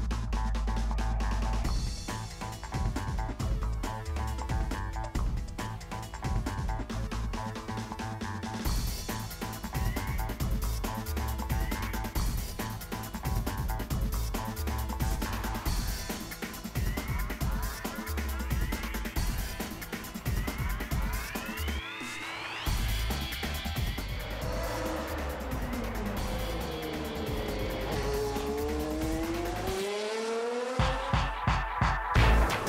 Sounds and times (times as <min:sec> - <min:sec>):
Music: 0:00.0 - 0:32.6.